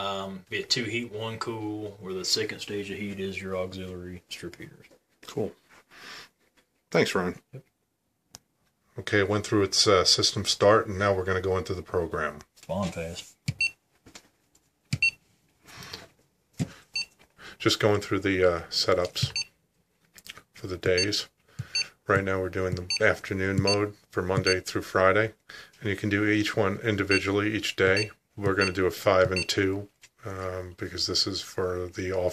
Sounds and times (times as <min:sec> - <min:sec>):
Speech: 0:00.0 - 0:05.6, 0:06.9 - 0:07.7, 0:09.0 - 0:13.3, 0:17.6 - 0:19.4, 0:20.6 - 0:21.3, 0:22.1 - 0:32.3
Inside, small room: 0:00.0 - 0:32.3.